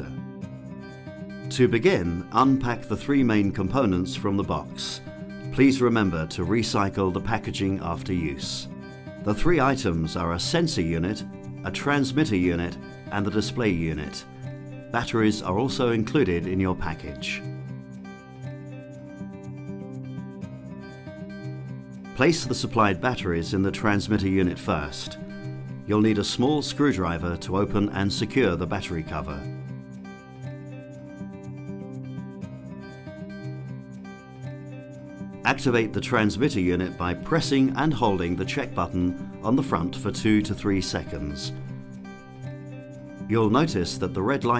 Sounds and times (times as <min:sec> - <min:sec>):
Music: 0:00.0 - 0:44.5
Speech: 0:01.5 - 0:08.7, 0:09.3 - 0:14.2, 0:15.0 - 0:17.5, 0:22.2 - 0:25.2, 0:25.9 - 0:29.5, 0:35.4 - 0:41.6, 0:43.3 - 0:44.5.